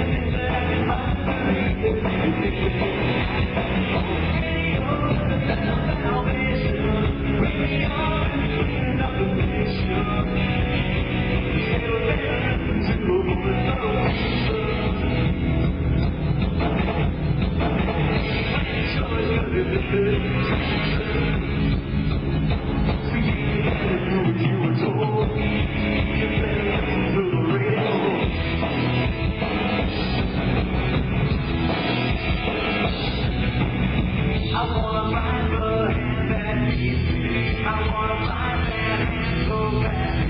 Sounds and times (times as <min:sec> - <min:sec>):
Music: 0:00.0 - 0:40.3.